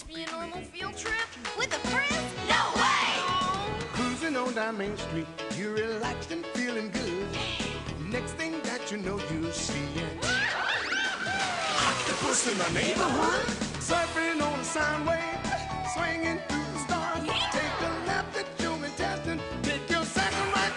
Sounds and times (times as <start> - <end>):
Music: 0.0 - 20.7.